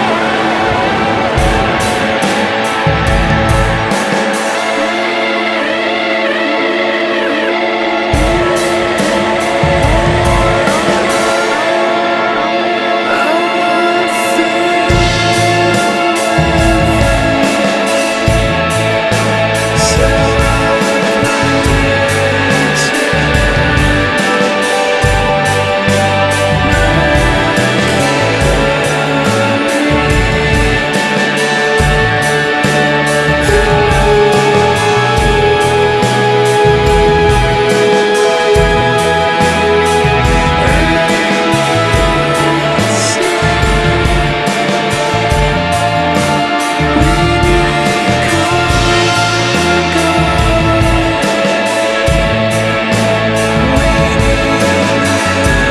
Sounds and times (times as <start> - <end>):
Independent music: 0.0 - 55.7.